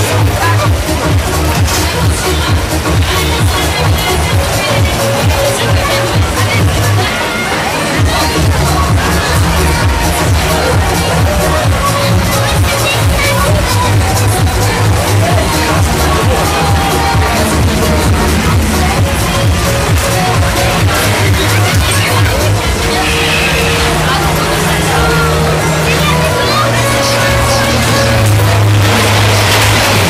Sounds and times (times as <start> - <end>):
Music: 0.0 - 30.0
Speech: 0.0 - 30.0.